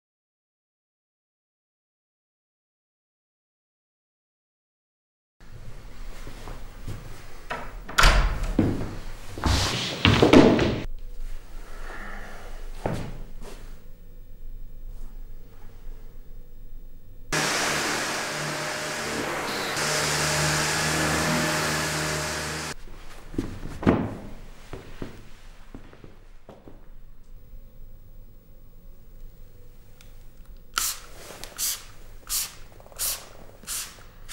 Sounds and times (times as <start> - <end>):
Spray: 30.8 - 34.3.